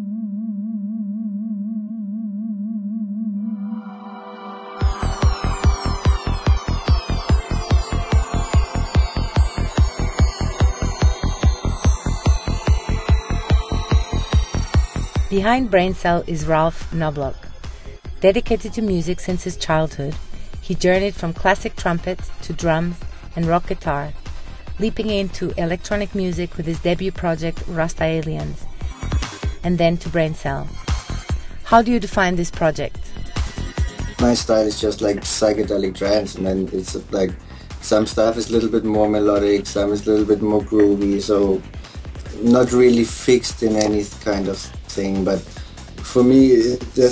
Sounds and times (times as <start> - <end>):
Music: 3.6 - 47.1
Speech: 15.3 - 17.4, 18.2 - 24.1, 24.8 - 28.6, 29.6 - 30.7, 31.7 - 32.9, 34.2 - 41.6, 42.3 - 47.1.